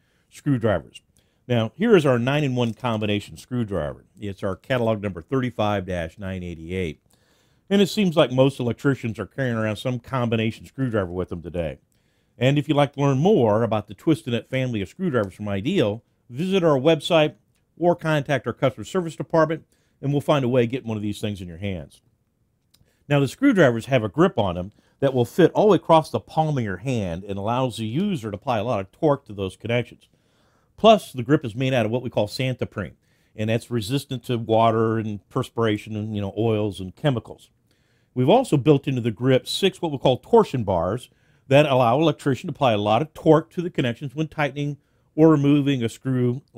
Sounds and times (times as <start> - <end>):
Speech: 0.3 - 7.0, 7.7 - 11.8, 12.4 - 22.0, 23.1 - 30.1, 30.8 - 37.6, 38.2 - 46.5.